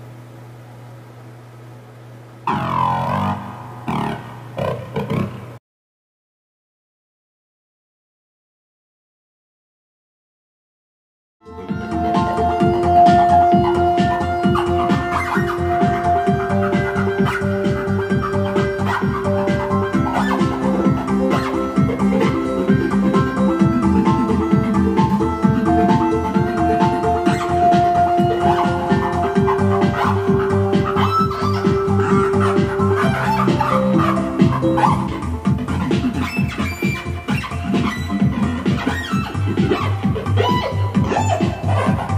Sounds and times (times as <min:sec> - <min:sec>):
Music: 0:02.5 - 0:04.2, 0:11.4 - 0:42.1.